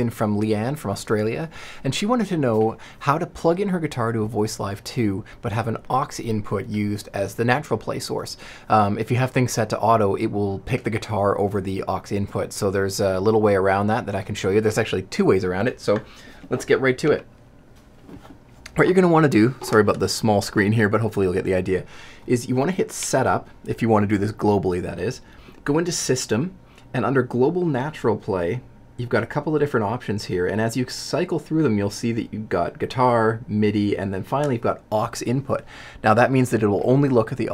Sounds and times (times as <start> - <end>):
Speech: 0.0 - 17.3, 18.7 - 37.5.